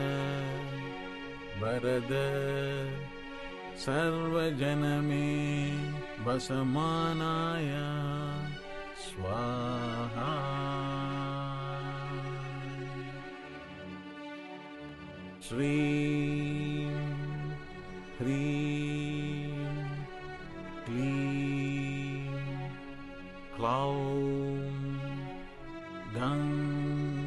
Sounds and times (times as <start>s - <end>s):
Mantra: 0.0s - 3.1s, 3.8s - 13.0s, 15.4s - 17.6s, 18.2s - 20.1s, 20.8s - 22.8s, 23.6s - 25.2s, 26.1s - 27.2s.